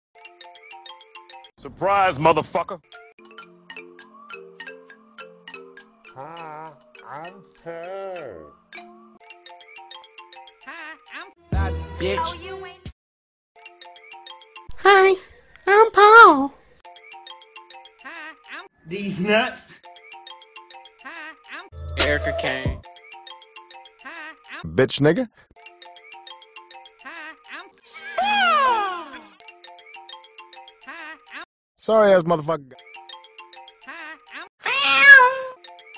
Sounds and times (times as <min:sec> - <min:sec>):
Music: 0:00.2 - 0:13.0, 0:13.6 - 0:15.0, 0:16.8 - 0:18.7, 0:19.4 - 0:24.6, 0:25.6 - 0:28.5, 0:29.2 - 0:31.4, 0:32.3 - 0:34.5, 0:35.6 - 0:35.9.